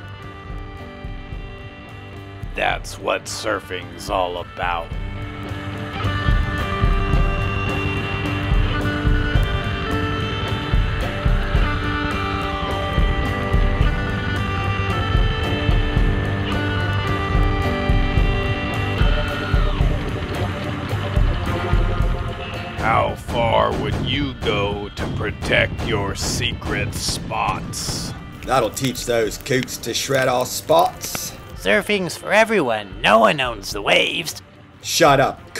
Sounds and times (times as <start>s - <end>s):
Music: 0.0s - 35.5s
Speech: 2.5s - 4.9s, 22.8s - 35.5s.